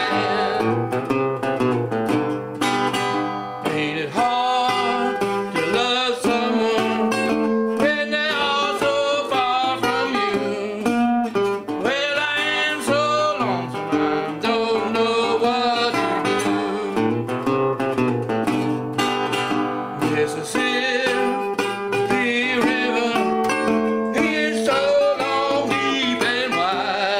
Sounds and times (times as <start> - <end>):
Guitar: 0.0 - 27.1.